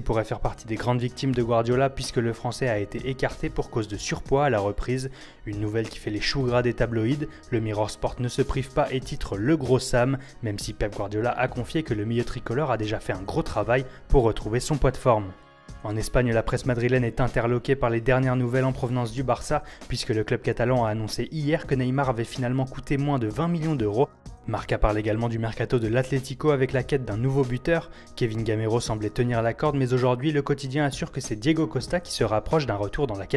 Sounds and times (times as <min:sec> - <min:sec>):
Music: 0:00.0 - 0:33.3
Speech: 0:00.0 - 0:33.3.